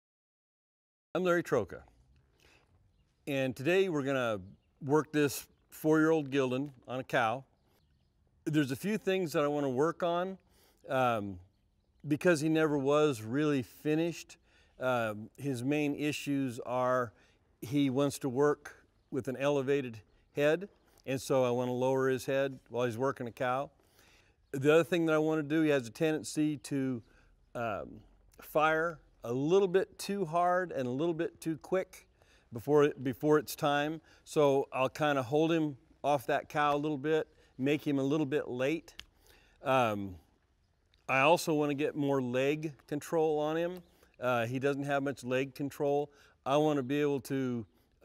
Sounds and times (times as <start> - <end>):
Speech: 1.2 - 2.0, 3.2 - 7.5, 8.5 - 11.5, 12.1 - 23.8, 24.5 - 39.0, 39.6 - 40.3, 41.1 - 48.0.